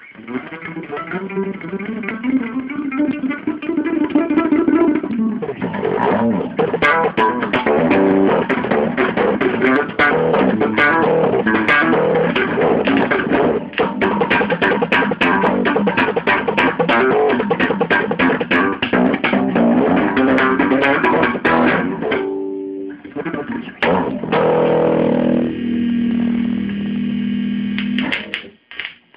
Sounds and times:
Bass guitar: 0.0s - 28.7s.

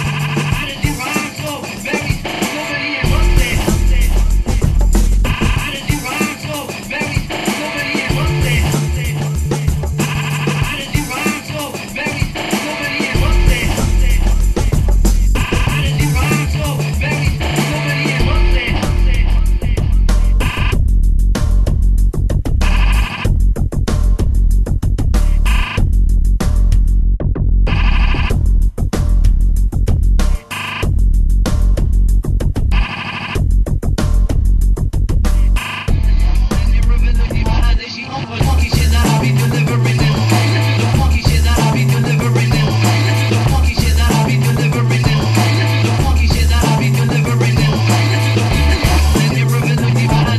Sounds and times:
Techno: 0.0s - 24.5s, 25.1s - 26.1s, 27.7s - 29.0s, 30.3s - 34.6s, 35.3s - 50.3s.

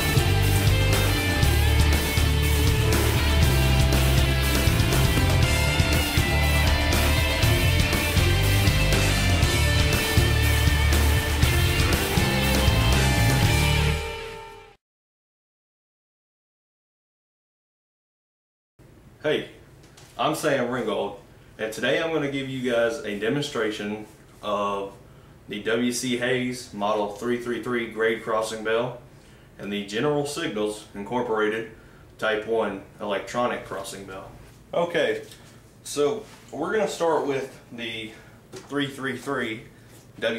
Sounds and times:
Speech: 19.2s - 19.6s, 20.2s - 29.0s, 29.6s - 40.3s.

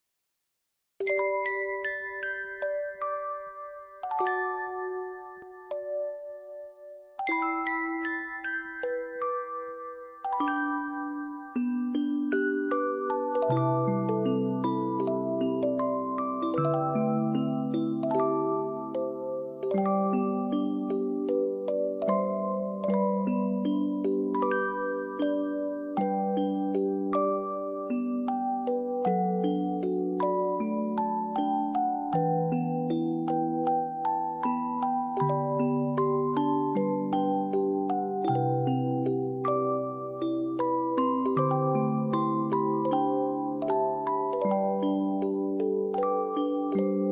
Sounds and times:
Music: 1.0s - 47.1s.

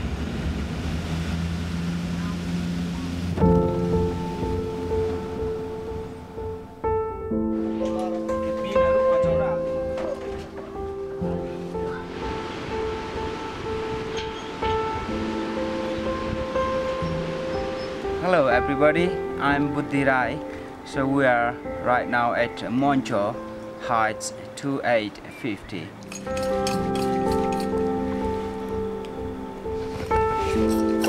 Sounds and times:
Water: 0.0s - 6.9s, 7.5s - 31.0s
Music: 2.0s - 31.0s
Speech: 18.2s - 25.9s.

